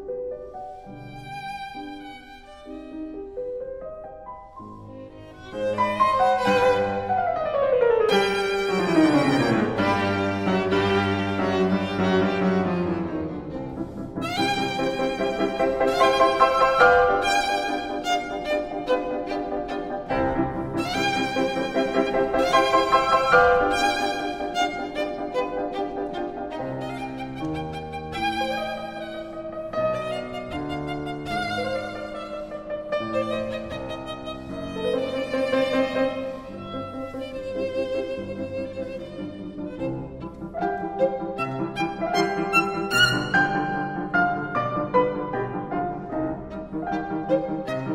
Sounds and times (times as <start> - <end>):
Violin, fiddle: 0.0 - 47.9.